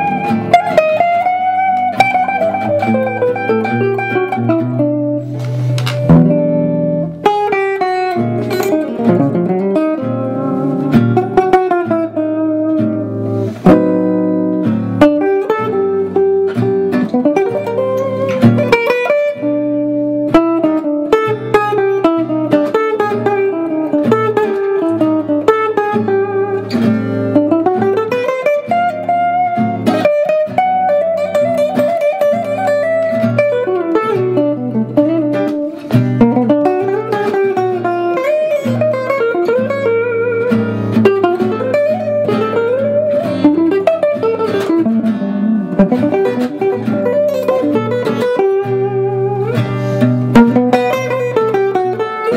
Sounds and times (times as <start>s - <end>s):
Guitar: 0.0s - 52.3s.